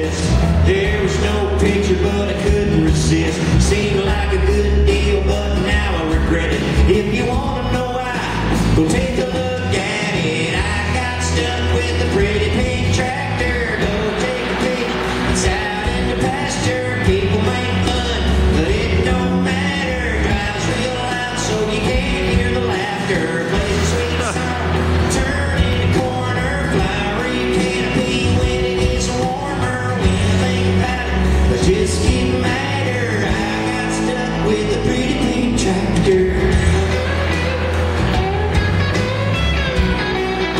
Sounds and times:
Male singing: 0.0 - 37.8
Music: 0.0 - 40.5.

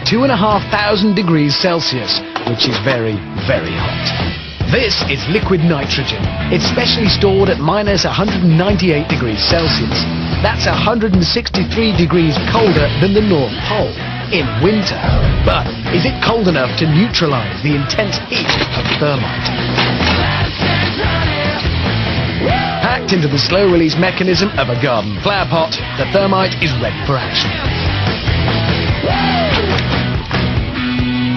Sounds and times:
Speech: 0.0 - 4.1, 4.7 - 19.3, 22.8 - 27.5
Music: 0.0 - 31.3.

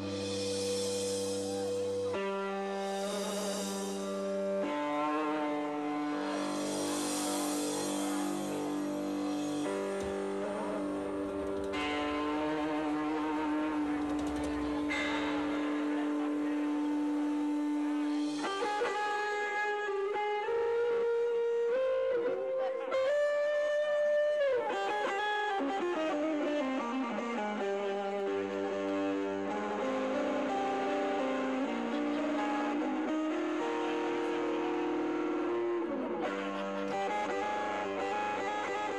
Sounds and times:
Electric guitar: 0.0 - 38.9.

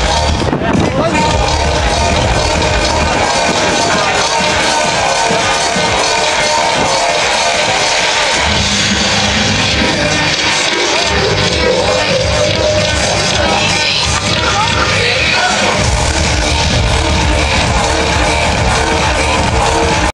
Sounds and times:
Electronica: 0.0 - 20.1
Speech: 0.4 - 5.5, 13.4 - 15.8.

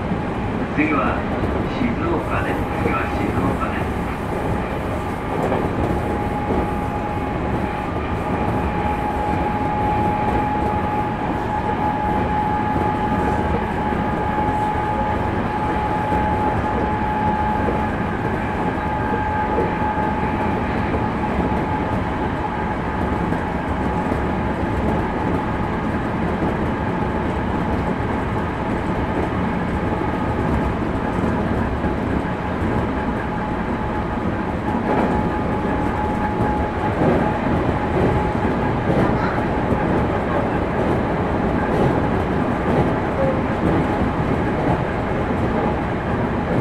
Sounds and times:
Train: 0.0 - 46.6.

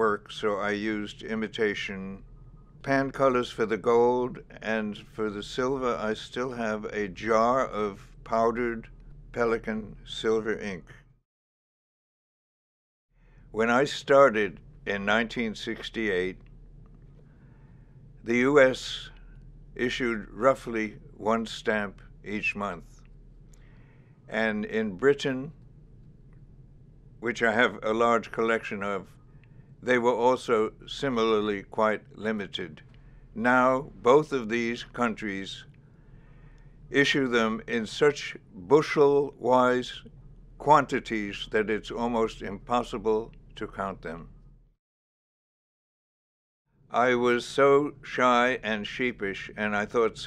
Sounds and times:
Speech: 0.0 - 2.2, 2.9 - 11.0, 13.6 - 16.4, 18.3 - 19.2, 19.8 - 22.9, 24.3 - 25.5, 27.2 - 29.1, 29.8 - 32.8, 33.4 - 35.7, 36.9 - 44.3, 46.9 - 50.2
Inside, small room: 0.0 - 11.3, 13.2 - 44.8, 46.7 - 50.2.

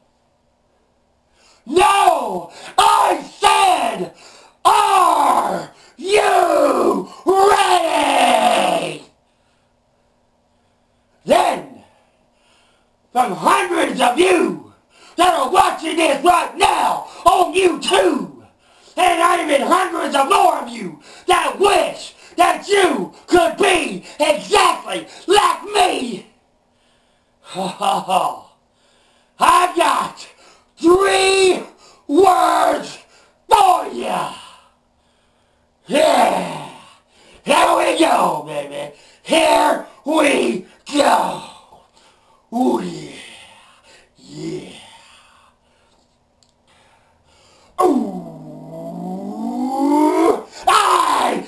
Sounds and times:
Yell: 1.6 - 9.2, 11.2 - 12.0, 13.2 - 18.4, 19.0 - 26.3, 27.5 - 28.5, 29.4 - 34.7, 35.9 - 41.8, 42.5 - 43.6, 44.2 - 45.2, 47.8 - 51.4
Speech: 1.7 - 9.1, 11.2 - 11.9, 13.2 - 26.4, 27.5 - 28.6, 29.4 - 34.6, 35.9 - 41.7, 42.5 - 43.4, 50.0 - 51.4.

